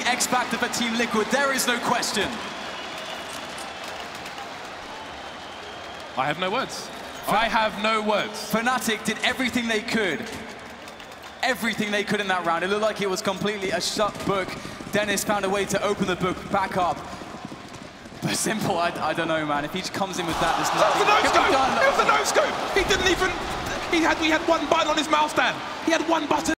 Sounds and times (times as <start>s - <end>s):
Speech: 0.0s - 2.4s, 6.2s - 10.4s, 11.4s - 17.0s, 18.2s - 26.5s.